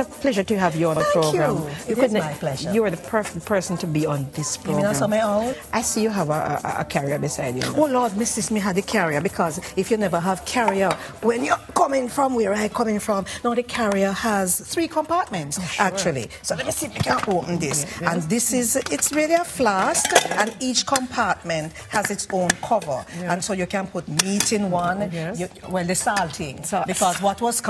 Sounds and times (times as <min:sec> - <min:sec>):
Music: 0:00.0 - 0:27.7
Speech: 0:00.2 - 0:09.3.